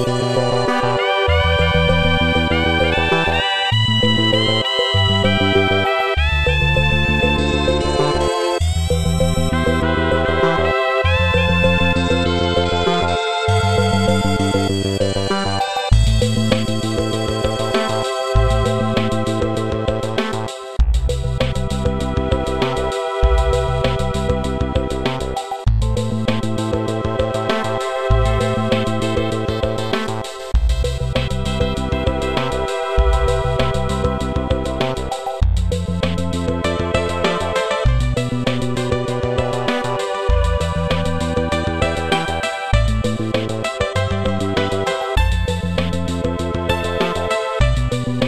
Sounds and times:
Video game music: 0.0 - 48.2.

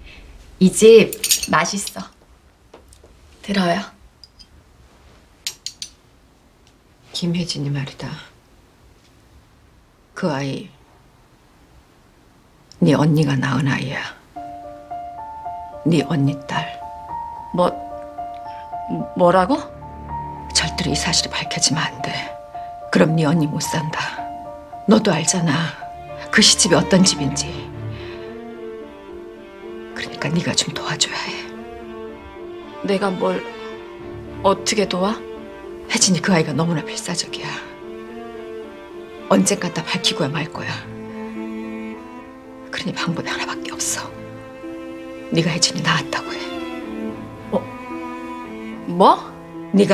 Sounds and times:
Cello: 14.4 - 49.9
String section: 14.4 - 49.9.

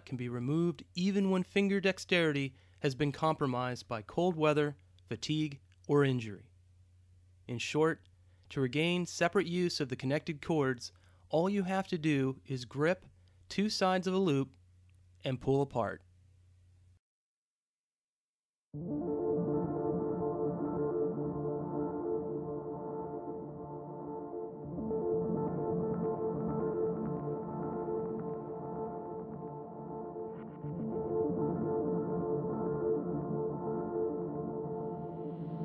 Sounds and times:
Speech: 0.0 - 6.5, 7.5 - 14.6, 15.2 - 16.1.

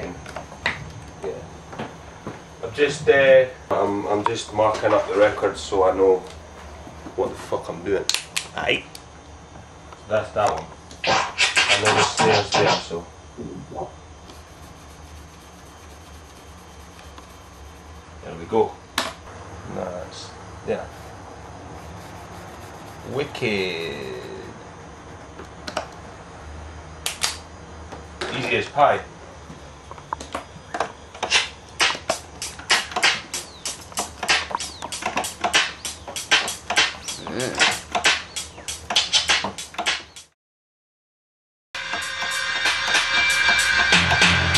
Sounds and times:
Speech: 2.6 - 6.3, 7.2 - 8.9, 10.1 - 10.7, 11.7 - 14.0, 18.2 - 18.8, 19.6 - 21.0, 23.0 - 24.6, 28.2 - 29.1, 37.2 - 37.6
Scratching (performance technique): 11.0 - 12.9, 14.3 - 18.1, 21.7 - 24.5, 31.2 - 40.3.

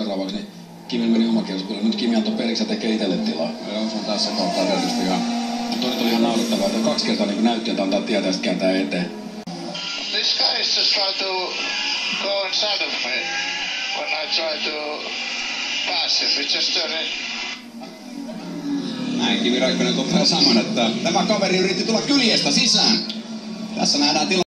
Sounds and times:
Speech: 0.0 - 9.1, 14.0 - 15.1, 15.9 - 17.2, 19.2 - 23.1, 23.8 - 24.5.

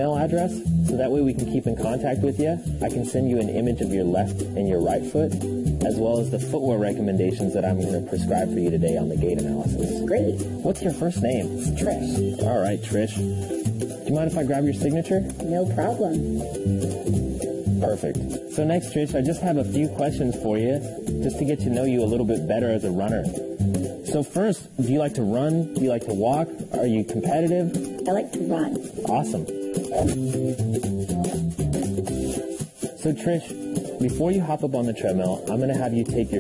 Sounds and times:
Speech: 0.0 - 13.4, 14.1 - 16.2, 17.8 - 23.4, 24.0 - 30.2, 33.0 - 36.4
Music: 0.0 - 36.4.

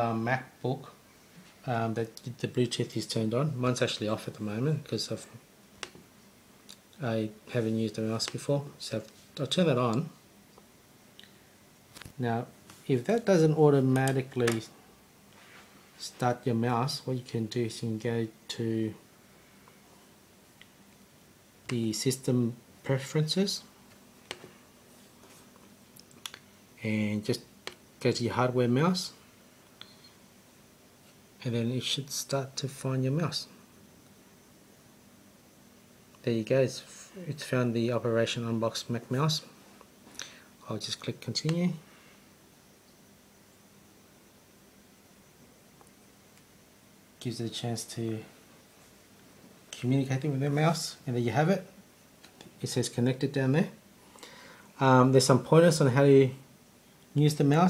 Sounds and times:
Speech: 0.0 - 1.0, 1.6 - 5.4, 7.0 - 10.2, 12.2 - 14.8, 16.0 - 19.0, 21.7 - 23.7, 26.8 - 29.2, 31.4 - 33.6, 36.2 - 39.5, 40.6 - 41.9, 47.2 - 48.4, 49.7 - 51.8, 52.6 - 53.8, 54.8 - 56.4, 57.2 - 57.7.

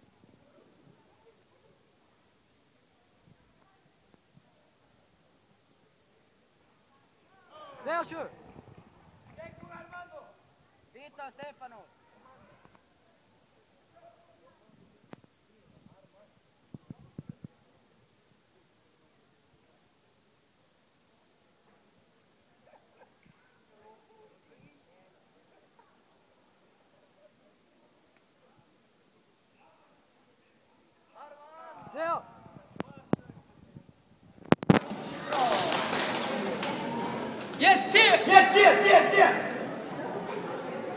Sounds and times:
Inside, large room or hall: 0.0 - 40.9.

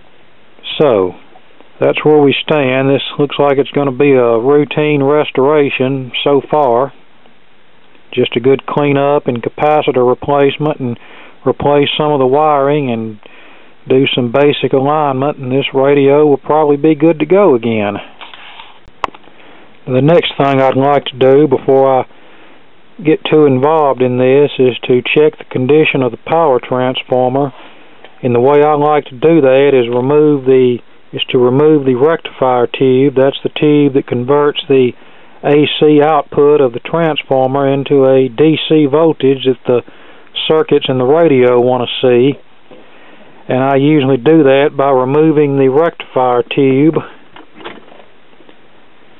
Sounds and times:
Speech: 0.6 - 1.2, 1.8 - 7.0, 8.1 - 13.3, 13.9 - 18.1, 19.8 - 22.1, 23.0 - 27.6, 28.2 - 42.5, 43.5 - 47.2.

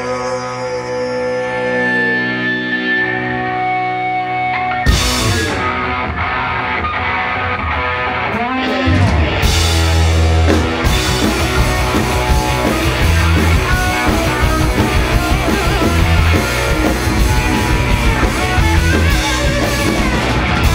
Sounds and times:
Music: 0.0 - 20.7.

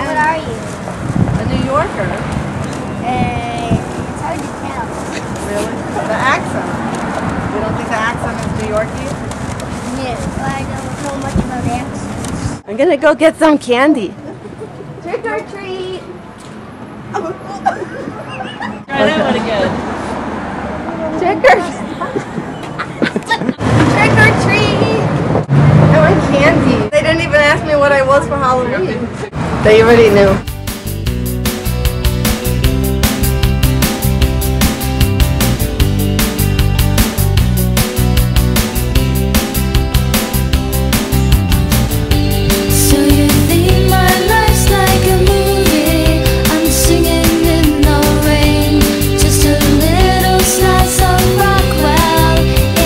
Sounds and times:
Vehicle: 0.0 - 30.5.

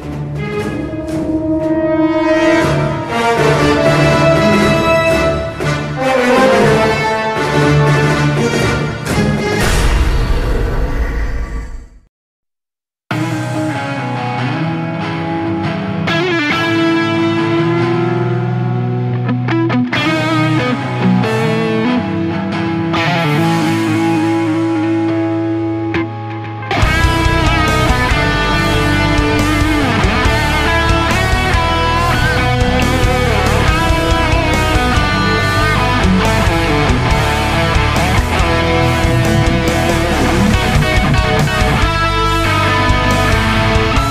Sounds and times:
Electric guitar: 0.0 - 9.8, 13.1 - 44.1.

